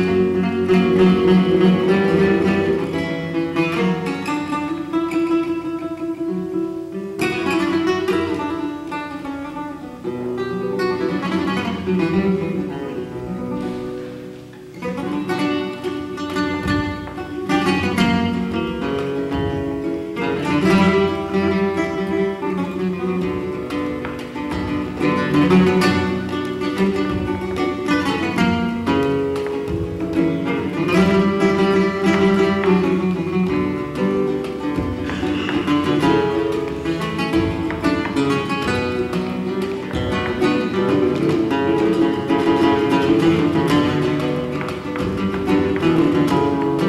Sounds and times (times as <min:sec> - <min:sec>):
Flamenco: 0:00.0 - 0:46.8
Guitar: 0:00.0 - 0:46.8.